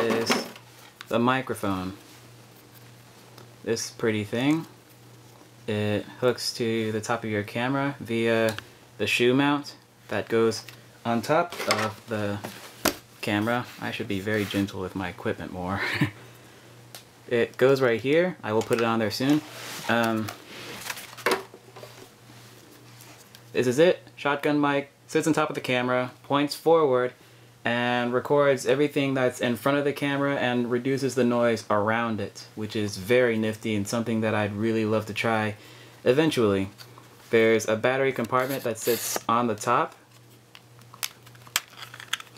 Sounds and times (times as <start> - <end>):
Speech: 0.0 - 2.0, 3.6 - 4.7, 5.7 - 12.5, 13.2 - 15.9, 17.3 - 20.4, 23.5 - 40.0.